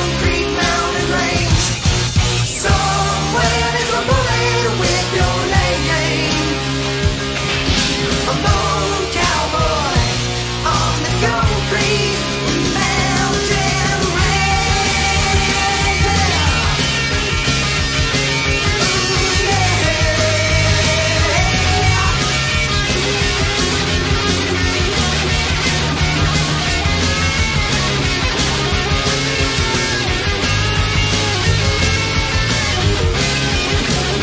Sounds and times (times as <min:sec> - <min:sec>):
Heavy metal: 0:00.0 - 0:34.2.